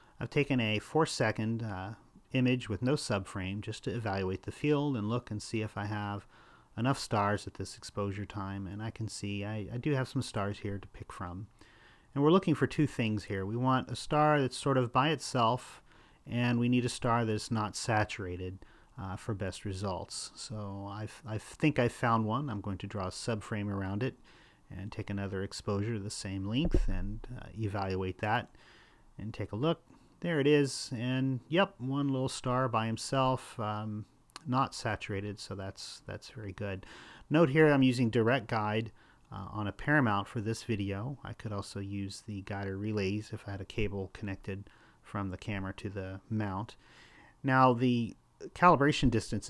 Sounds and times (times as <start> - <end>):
Speech: 0.2 - 28.6, 29.2 - 46.8, 47.4 - 49.5.